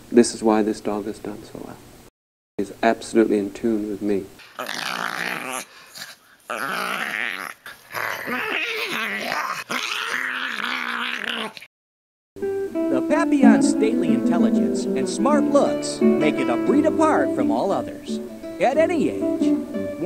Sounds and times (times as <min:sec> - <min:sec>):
Speech: 0:00.1 - 0:01.8, 0:02.6 - 0:04.4, 0:12.9 - 0:20.0
Dog: 0:04.6 - 0:11.7
Music: 0:12.4 - 0:20.0.